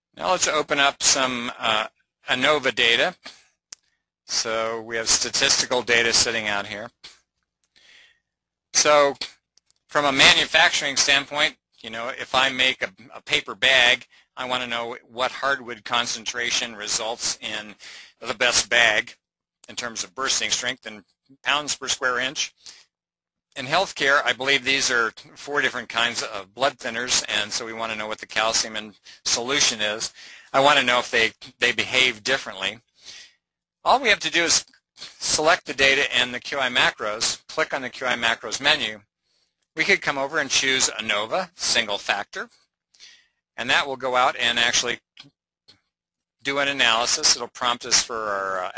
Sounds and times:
Speech: 0.2s - 3.4s, 4.3s - 7.2s, 8.8s - 9.3s, 9.9s - 22.8s, 23.6s - 33.3s, 33.9s - 39.0s, 39.8s - 45.3s, 46.4s - 48.7s.

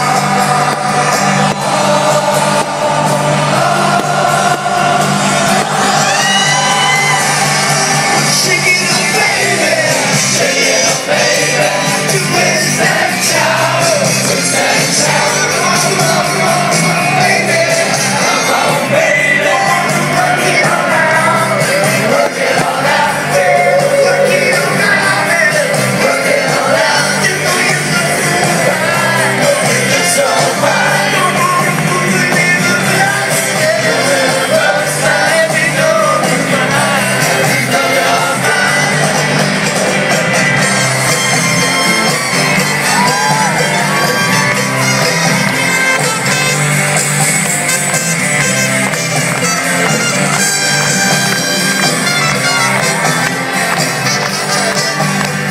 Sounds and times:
Music: 0.0s - 55.5s
Whoop: 5.6s - 8.1s, 42.8s - 43.9s.

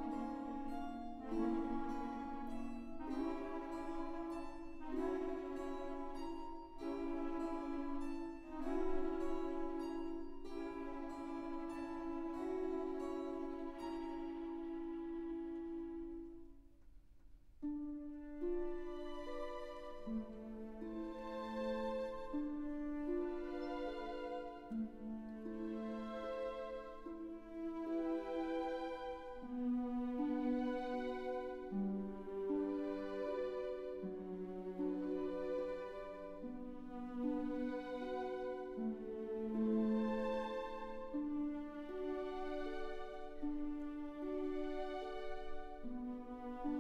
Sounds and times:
Music: 0.0s - 46.8s.

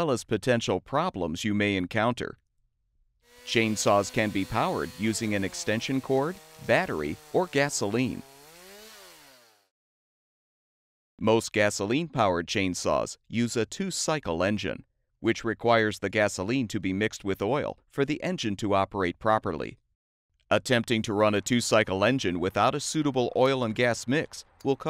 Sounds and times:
Speech: 0.0s - 2.4s, 3.5s - 8.2s, 11.2s - 19.8s, 20.5s - 24.8s.

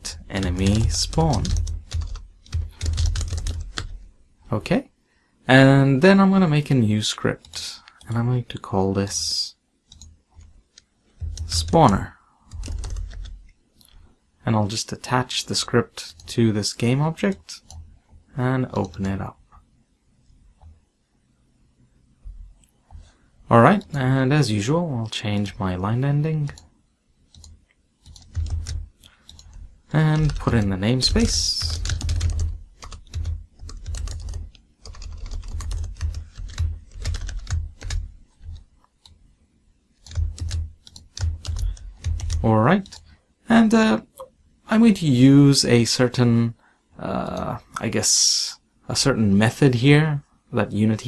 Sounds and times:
Speech: 0.0s - 1.6s, 4.5s - 4.9s, 5.5s - 9.6s, 11.5s - 12.2s, 14.4s - 17.7s, 18.4s - 19.4s, 23.5s - 26.6s, 29.9s - 31.8s, 42.4s - 51.0s
Computer keyboard: 0.0s - 4.0s, 9.9s - 14.0s, 18.7s - 19.2s, 27.3s - 39.2s, 40.0s - 43.1s.

